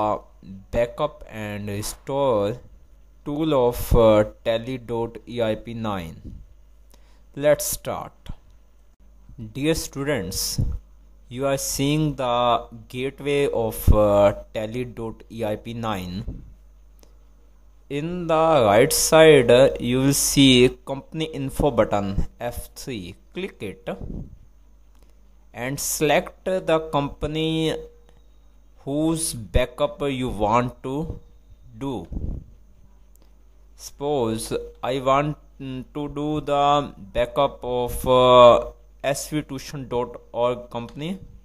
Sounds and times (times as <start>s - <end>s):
Speech: 0.0s - 6.4s, 7.4s - 8.4s, 9.4s - 16.4s, 17.9s - 24.2s, 25.5s - 27.9s, 28.8s - 32.4s, 33.8s - 41.3s.